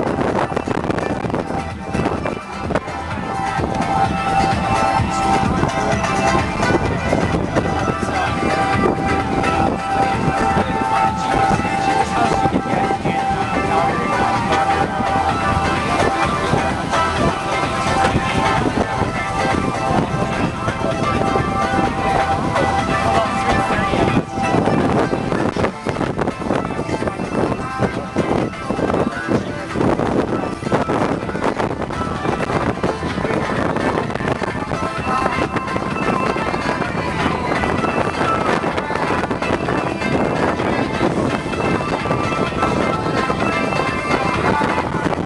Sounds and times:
Music: 0:00.0 - 0:45.2.

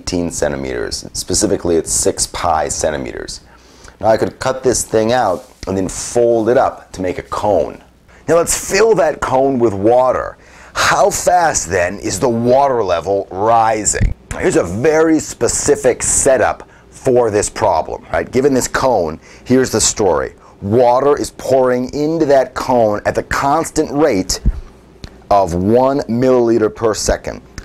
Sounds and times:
Speech: 0:00.0 - 0:24.6, 0:25.3 - 0:27.5.

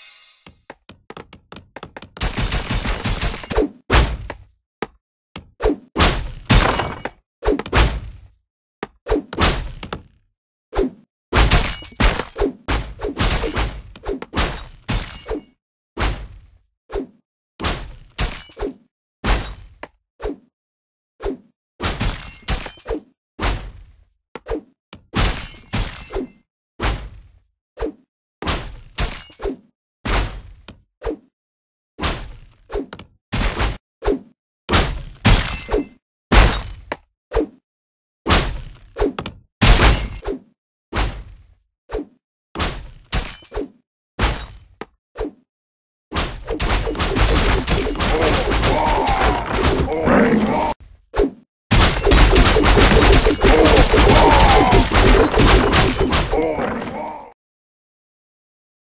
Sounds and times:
Whack, thwack: 0:02.2 - 0:04.5, 0:05.4 - 0:08.2, 0:08.8 - 0:10.1, 0:10.8 - 0:15.4, 0:16.0 - 0:16.5, 0:17.6 - 0:20.0, 0:21.8 - 0:22.8, 0:23.4 - 0:23.9, 0:24.5 - 0:26.2, 0:26.8 - 0:27.2, 0:27.9 - 0:29.3, 0:30.1 - 0:30.7, 0:32.0 - 0:37.1, 0:38.3 - 0:41.4, 0:42.6 - 0:43.5, 0:44.2 - 0:44.8, 0:46.1 - 0:50.7, 0:51.7 - 0:57.0.

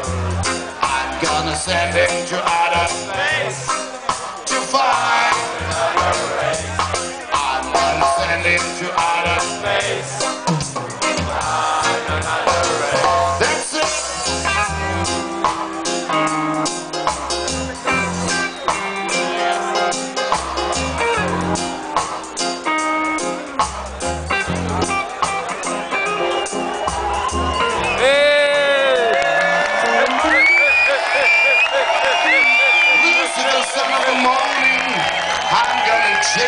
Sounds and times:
Music: 0:00.0 - 0:36.4.

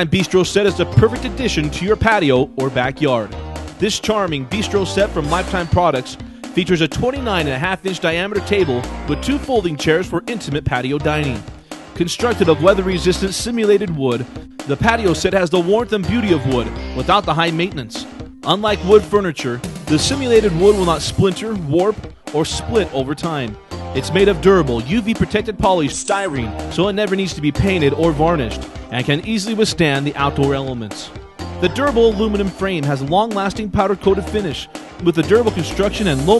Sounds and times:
Music: 0:00.0 - 0:36.3
Speech: 0:00.0 - 0:36.3.

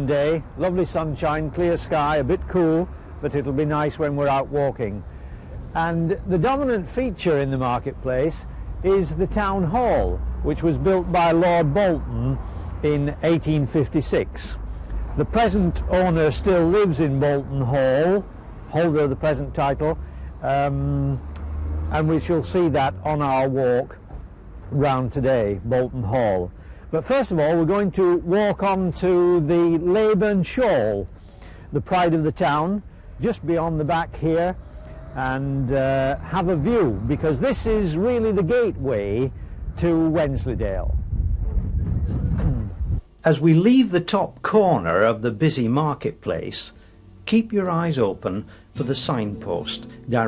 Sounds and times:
Speech: 0:00.0 - 0:05.0, 0:05.8 - 0:14.6, 0:15.2 - 0:21.2, 0:21.9 - 0:24.0, 0:24.7 - 0:31.1, 0:31.8 - 0:34.6, 0:35.2 - 0:41.0, 0:42.4 - 0:50.2.

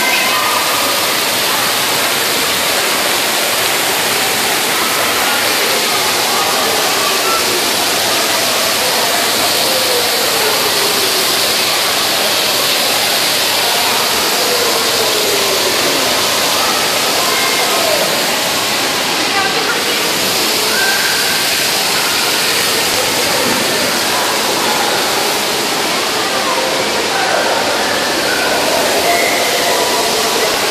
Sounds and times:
Waterfall: 0:00.0 - 0:30.7.

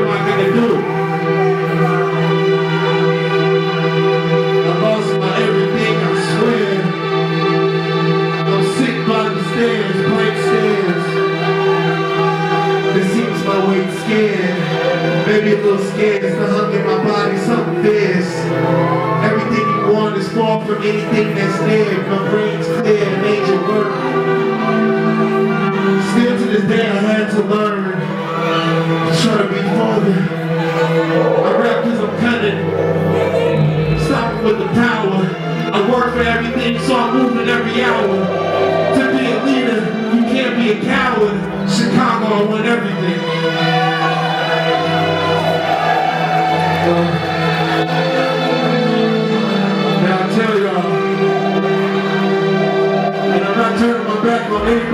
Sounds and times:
Speech: 0:00.0 - 0:00.9, 0:04.7 - 0:06.9, 0:08.5 - 0:11.2, 0:13.0 - 0:14.7, 0:15.3 - 0:18.5, 0:19.2 - 0:24.0, 0:26.0 - 0:28.1, 0:29.1 - 0:43.3, 0:46.8 - 0:47.2, 0:50.0 - 0:51.0, 0:53.4 - 0:54.9
Music: 0:00.0 - 0:54.9.

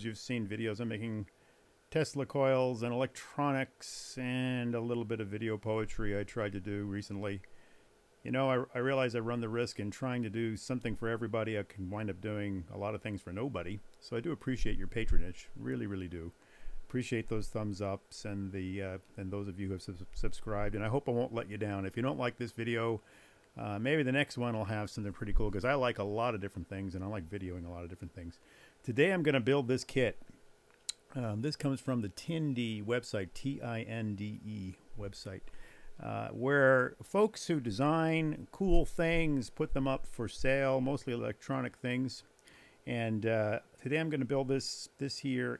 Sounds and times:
Speech: 0:00.0 - 0:01.3, 0:01.9 - 0:07.5, 0:08.2 - 0:23.0, 0:23.6 - 0:30.2, 0:30.9 - 0:42.3, 0:42.9 - 0:45.5.

